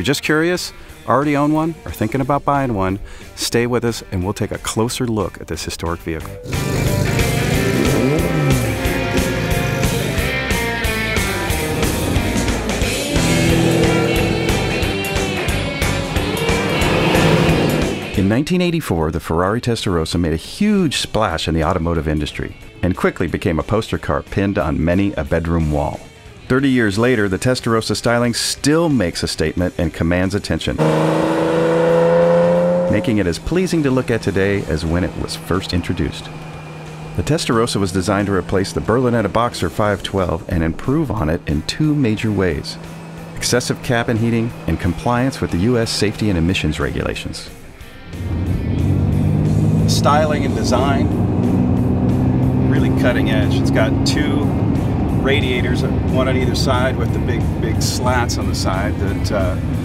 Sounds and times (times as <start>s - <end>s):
Speech: 0.0s - 6.4s, 18.2s - 30.8s, 32.9s - 36.3s, 37.2s - 42.8s, 43.4s - 47.6s, 49.9s - 51.1s, 52.6s - 54.5s, 55.2s - 59.6s
Music: 0.0s - 59.8s.